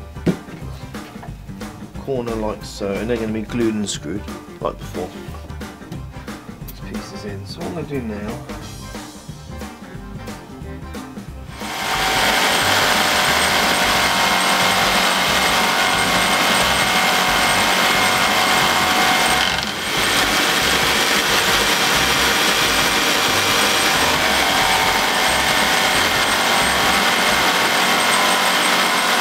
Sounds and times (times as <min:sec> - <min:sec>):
Sawing: 0:11.5 - 0:29.2
Wood: 0:11.6 - 0:29.2.